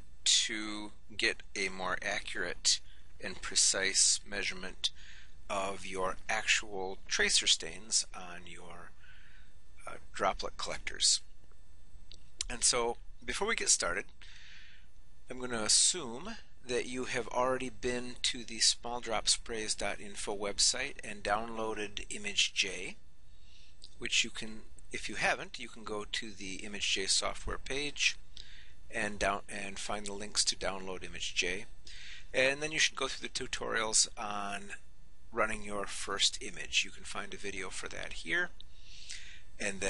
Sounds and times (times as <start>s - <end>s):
Speech: 0.3s - 9.0s, 9.8s - 11.3s, 12.4s - 14.1s, 15.3s - 23.0s, 23.9s - 28.2s, 28.9s - 38.6s, 39.6s - 39.8s.